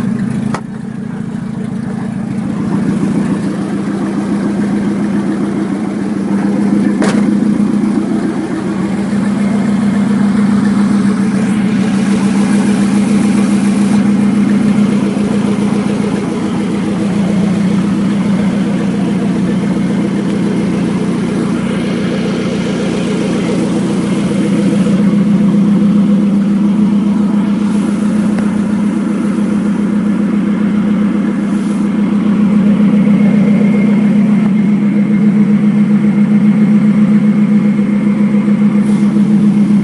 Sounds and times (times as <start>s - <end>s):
Idling: 0.0s - 39.8s
Medium engine (mid frequency): 0.0s - 39.8s
Vehicle: 0.0s - 39.8s.